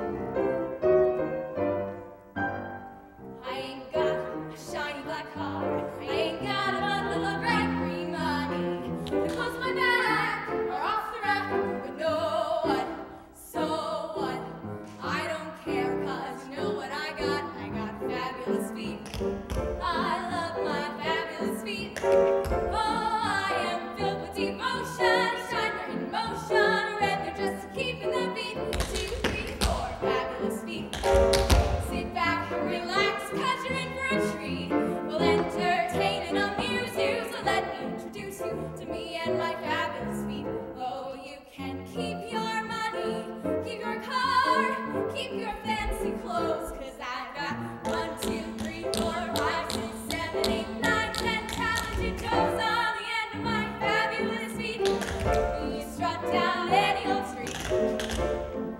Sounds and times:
Music: 0.0s - 58.7s.

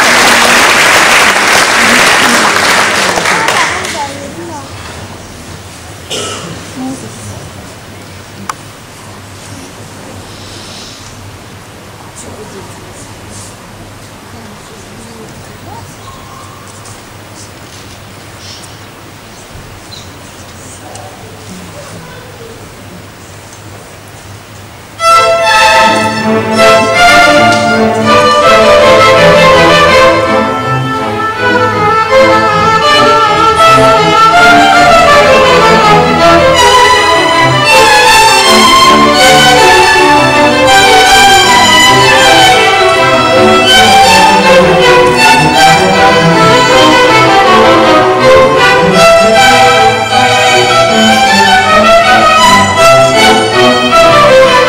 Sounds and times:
Speech: 14.3s - 16.3s, 20.4s - 23.4s
Violin, fiddle: 25.0s - 54.6s.

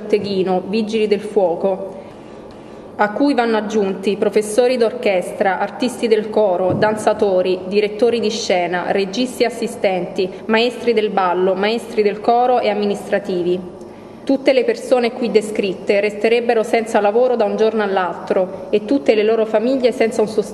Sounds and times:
Speech: 0.0s - 2.0s, 3.0s - 13.7s, 14.3s - 20.5s.

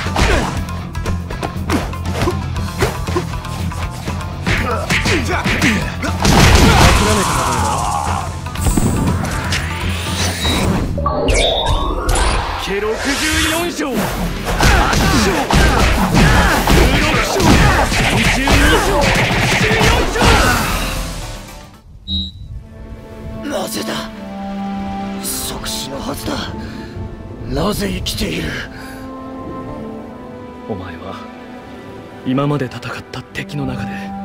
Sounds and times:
Music: 0.0s - 34.2s.

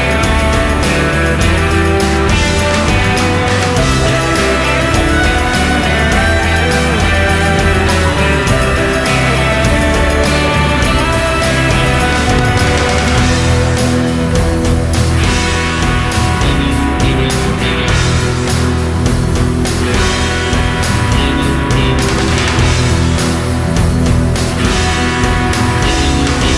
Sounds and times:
Music: 0.0s - 26.5s.

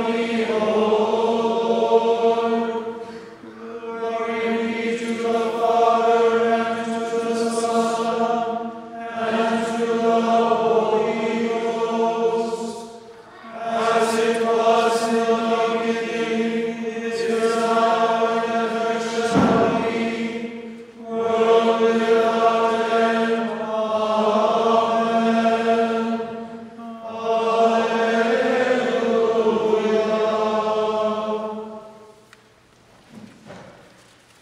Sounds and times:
Mantra: 0.0s - 32.1s.

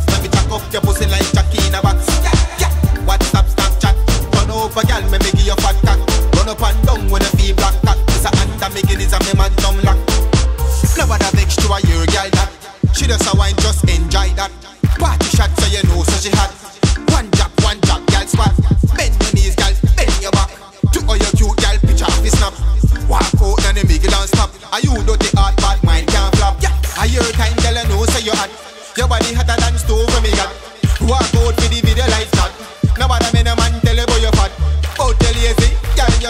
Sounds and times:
Reggae: 0.0s - 36.3s.

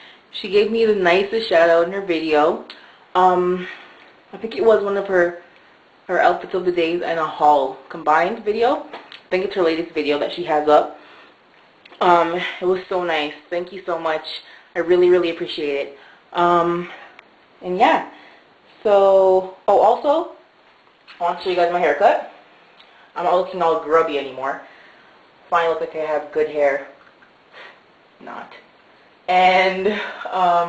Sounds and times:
Speech: 0.3s - 5.4s, 6.1s - 11.0s, 11.9s - 17.0s, 17.6s - 18.2s, 18.8s - 20.5s, 21.1s - 22.4s, 23.2s - 24.7s, 25.5s - 27.0s, 28.2s - 28.7s, 29.3s - 30.6s.

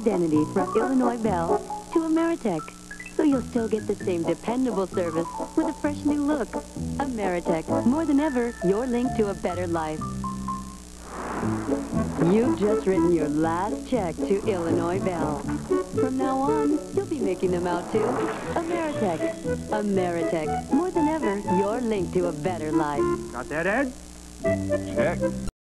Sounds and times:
Speech: 0.0s - 10.0s, 12.2s - 15.4s, 16.0s - 24.0s, 24.9s - 25.2s
Music: 0.0s - 25.5s.

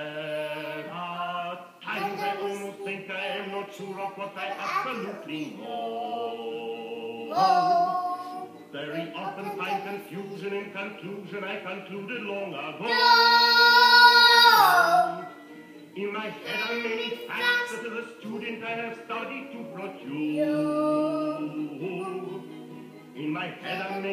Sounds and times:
Child singing: 0.0s - 0.9s, 1.8s - 5.9s, 7.2s - 10.9s, 12.8s - 15.4s, 16.2s - 18.6s, 19.4s - 22.5s, 23.4s - 24.1s
Male singing: 0.0s - 24.1s
Music: 0.0s - 24.1s.

